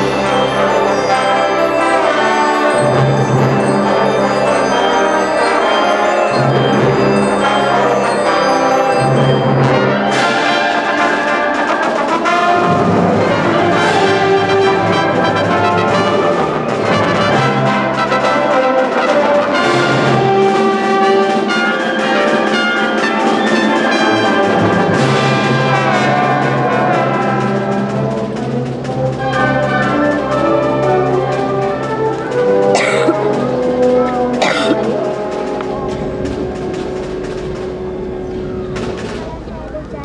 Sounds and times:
Orchestra: 0:00.0 - 0:40.0.

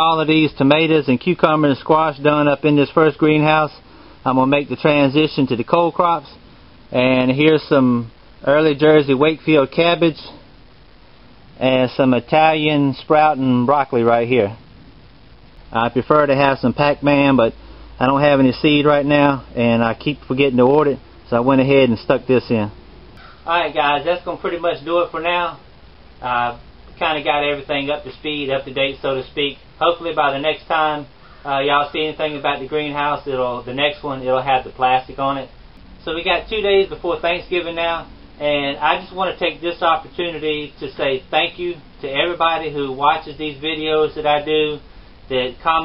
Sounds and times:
Speech: 0:00.0 - 0:10.4, 0:11.6 - 0:14.6, 0:15.7 - 0:22.8, 0:23.5 - 0:25.6, 0:26.2 - 0:45.8.

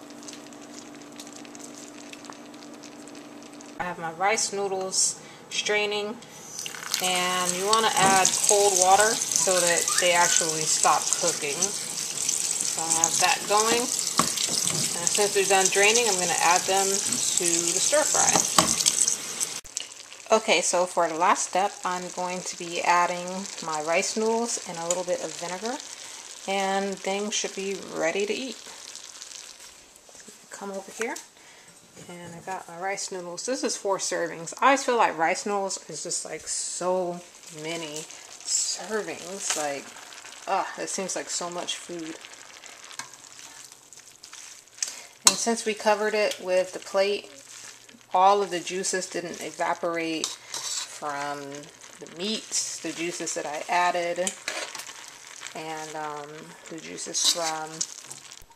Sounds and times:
Frying (food): 0:00.0 - 0:58.5
Sizzle: 0:00.0 - 0:58.5.

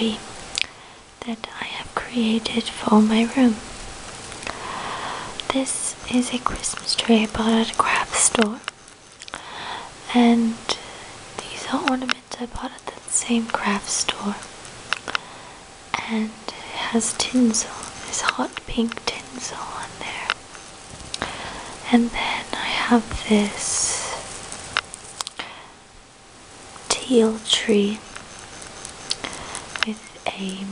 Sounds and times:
Speech: 0:00.0 - 0:00.2, 0:01.2 - 0:03.6, 0:05.5 - 0:08.6, 0:10.1 - 0:10.8, 0:11.4 - 0:14.5, 0:16.0 - 0:20.3, 0:21.9 - 0:24.2, 0:26.9 - 0:28.0, 0:29.8 - 0:30.7
Whispering: 0:01.2 - 0:03.4, 0:05.5 - 0:08.7, 0:11.4 - 0:14.5, 0:16.0 - 0:20.4, 0:21.8 - 0:24.2, 0:26.9 - 0:28.0, 0:29.3 - 0:30.7.

